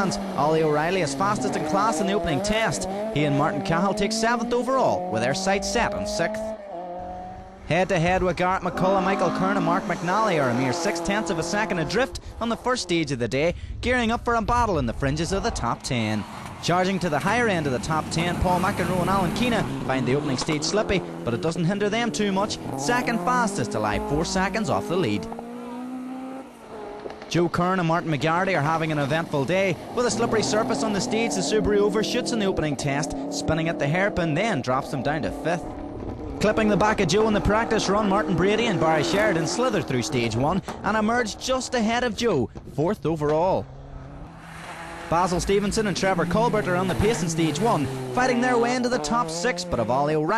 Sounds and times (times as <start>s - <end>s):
Speech: 0.0s - 6.5s, 7.7s - 25.3s, 27.3s - 35.6s, 36.4s - 43.6s, 45.1s - 50.3s
Race car, auto racing: 0.0s - 13.4s, 14.0s - 50.3s.